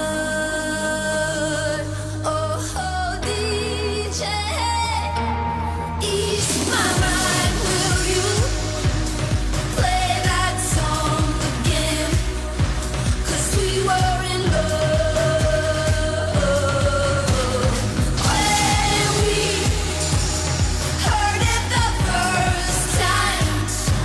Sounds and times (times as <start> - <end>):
Singing: 0.0 - 24.0.